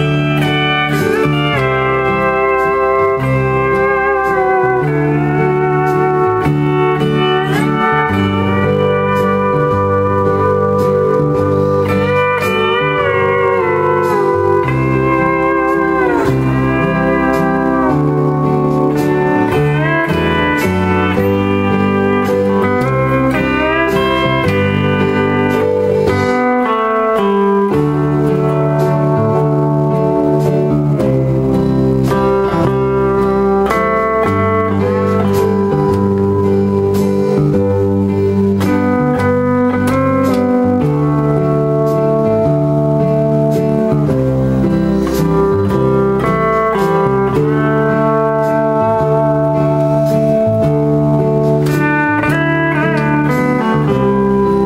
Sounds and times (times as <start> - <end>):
Steel guitar, slide guitar: 0.0 - 54.6.